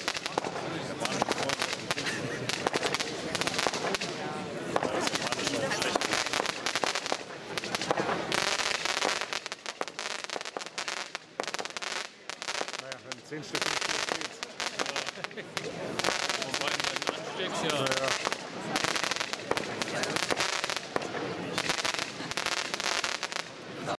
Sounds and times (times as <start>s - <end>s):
Speech: 0.2s - 6.6s, 12.8s - 20.3s.